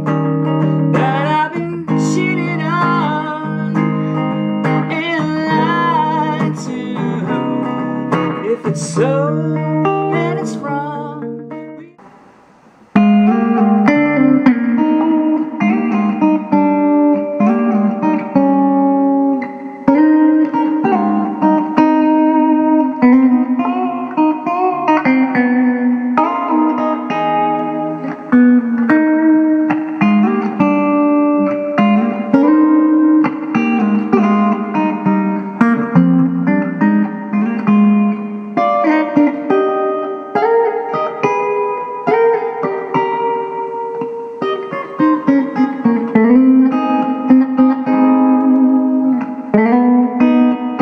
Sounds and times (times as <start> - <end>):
Acoustic guitar: 0.0 - 50.8
Strum: 0.0 - 50.8.